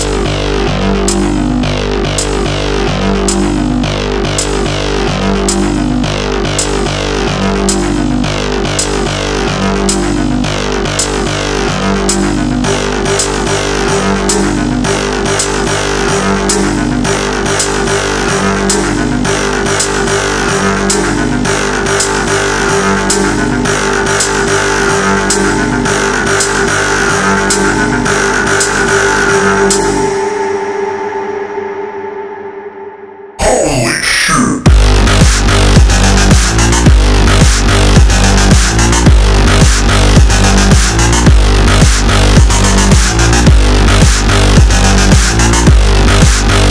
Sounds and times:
Music: 0.0s - 46.7s.

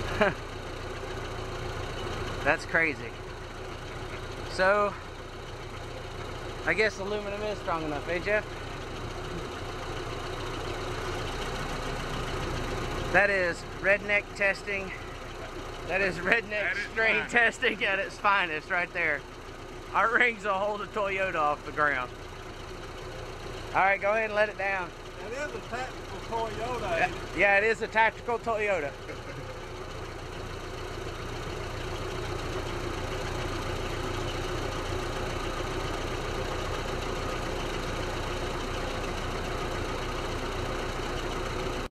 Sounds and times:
Car: 0.0s - 41.9s
Speech: 2.5s - 3.2s, 6.7s - 8.4s, 13.1s - 15.0s, 15.9s - 19.2s, 20.0s - 22.1s, 23.8s - 29.0s.

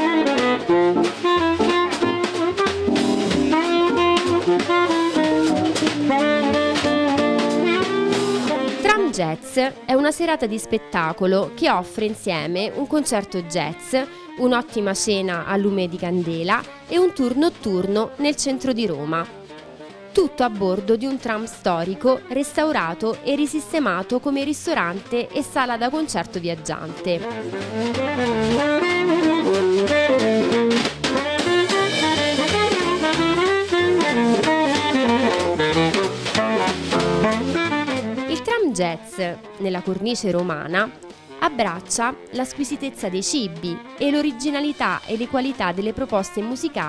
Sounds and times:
Music: 0.0s - 46.8s
Speech: 8.8s - 19.3s, 20.2s - 27.4s, 38.3s - 46.8s.

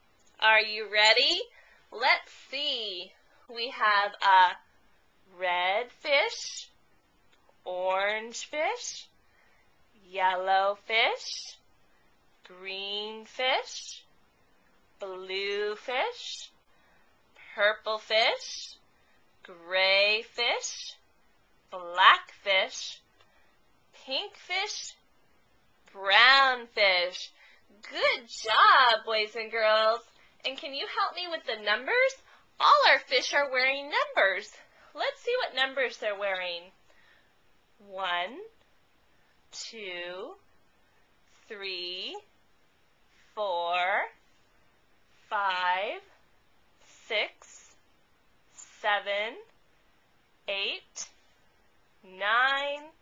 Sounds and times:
Speech: 0.4s - 4.6s, 5.3s - 6.7s, 7.6s - 9.1s, 10.0s - 11.6s, 12.5s - 14.1s, 15.0s - 16.5s, 17.4s - 18.8s, 19.4s - 21.0s, 21.8s - 23.0s, 24.0s - 25.0s, 25.9s - 36.8s, 37.8s - 38.5s, 39.5s - 40.4s, 41.4s - 42.3s, 43.4s - 44.2s, 45.3s - 46.1s, 46.9s - 47.7s, 48.6s - 49.5s, 50.5s - 51.1s, 52.0s - 53.0s.

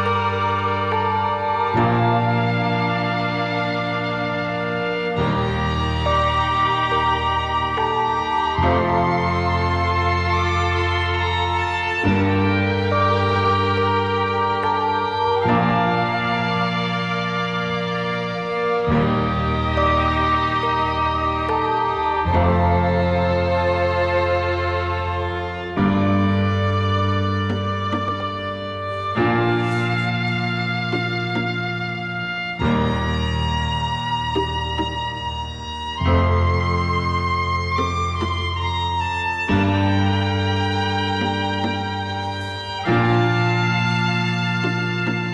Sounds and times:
Background music: 0.0s - 45.3s.

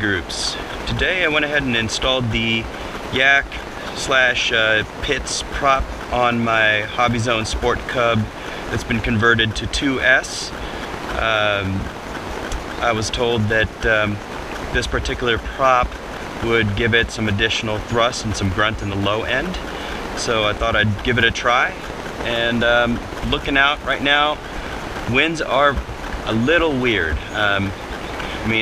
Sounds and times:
Speech: 0.0s - 11.9s, 12.6s - 24.5s, 25.1s - 28.6s.

